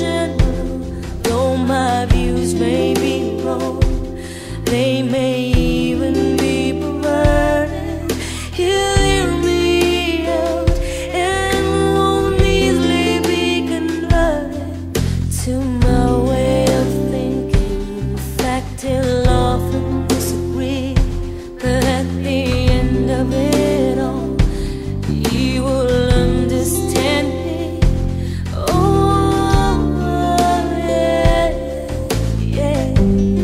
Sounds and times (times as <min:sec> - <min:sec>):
Christian music: 0:00.0 - 0:33.4.